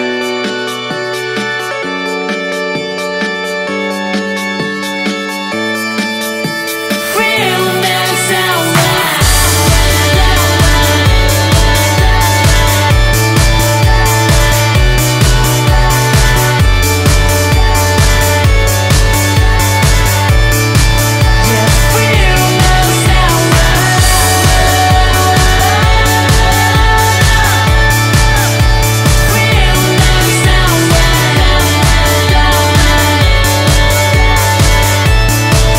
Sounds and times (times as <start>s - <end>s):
Independent music: 0.0s - 35.7s.